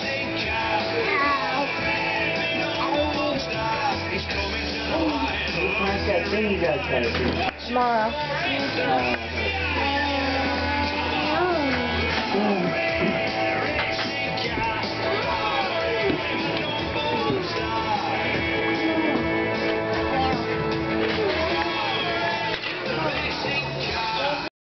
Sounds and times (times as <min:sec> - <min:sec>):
Music: 0:00.0 - 0:24.5.